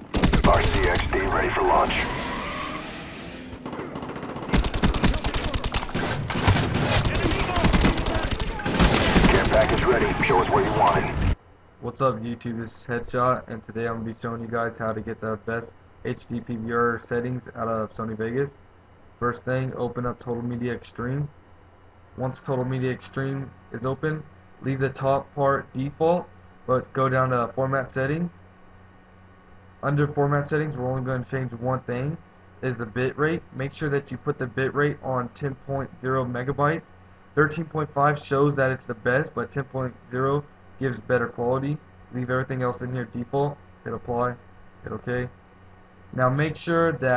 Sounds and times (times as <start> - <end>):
Speech: 0.4 - 2.1, 7.1 - 11.2, 11.8 - 18.6, 19.2 - 21.4, 22.2 - 28.4, 29.8 - 36.8, 37.4 - 45.3, 46.1 - 47.1.